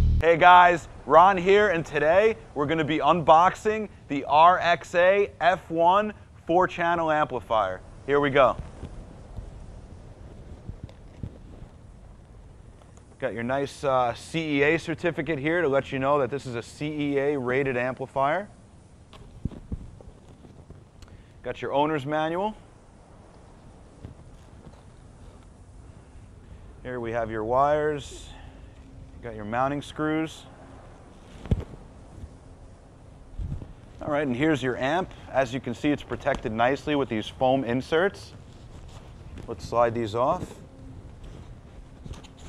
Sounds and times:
Speech: 0.2s - 8.6s, 13.2s - 18.6s, 21.4s - 22.6s, 26.8s - 28.4s, 29.2s - 30.5s, 34.0s - 38.4s, 39.5s - 40.6s.

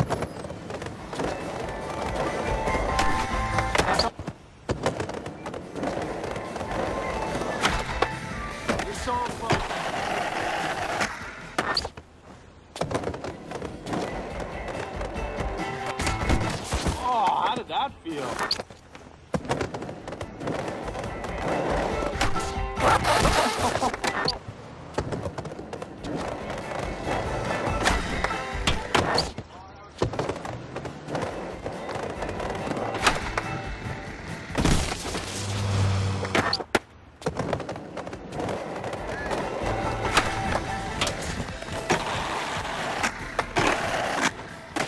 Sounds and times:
Music: 1.7s - 3.8s, 6.7s - 8.8s, 14.1s - 16.6s, 20.9s - 23.3s, 26.6s - 29.1s, 31.9s - 34.6s, 39.3s - 44.8s.

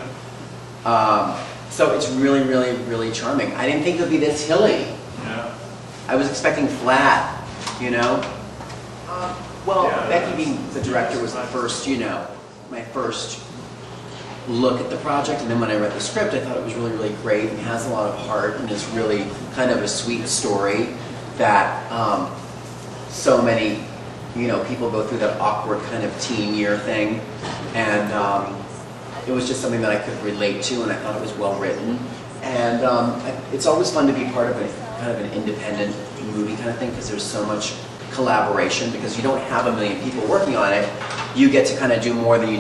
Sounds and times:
Speech: 0.8s - 8.4s, 9.1s - 13.5s, 14.5s - 22.4s, 23.1s - 42.6s.

